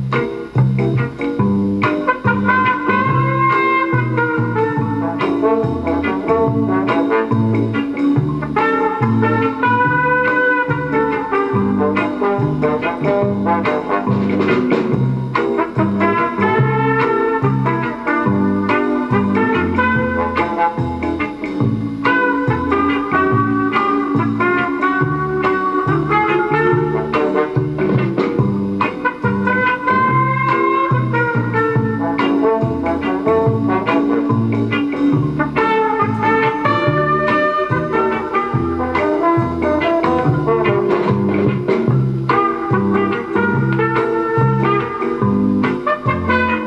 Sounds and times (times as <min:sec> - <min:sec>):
Background music: 0:00.0 - 0:46.6.